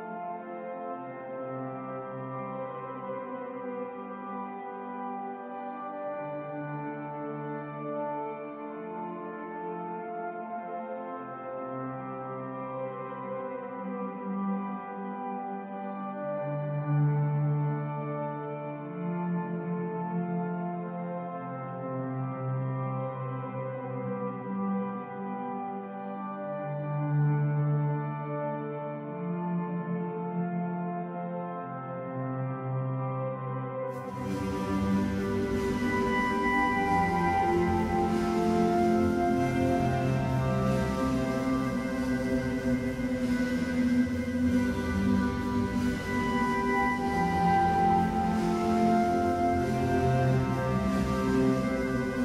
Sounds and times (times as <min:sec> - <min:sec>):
Music: 0:00.0 - 0:52.2.